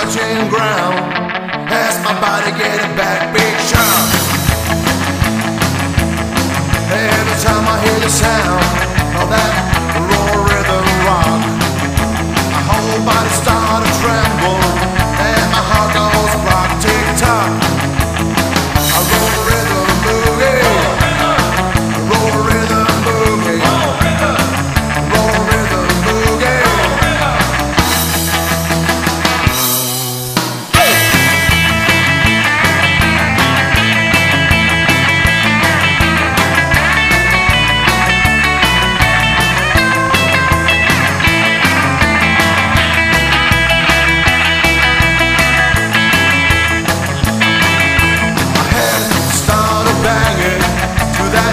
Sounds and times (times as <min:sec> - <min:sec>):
Psychedelic rock: 0:00.0 - 0:51.5.